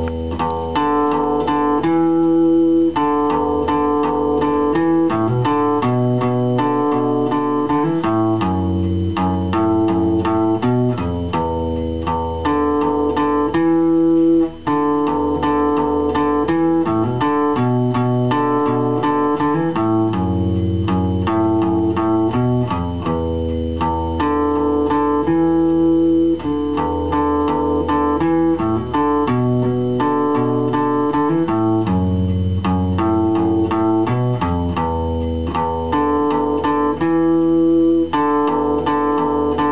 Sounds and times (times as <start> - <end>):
Acoustic guitar: 0.0 - 39.7
Strum: 0.0 - 39.7.